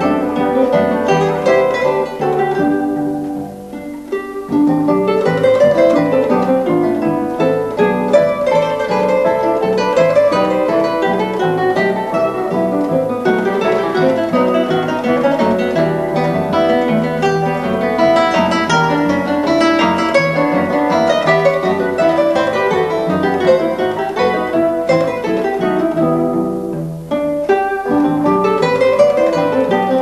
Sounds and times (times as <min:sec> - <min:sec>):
Acoustic guitar: 0:00.0 - 0:30.0.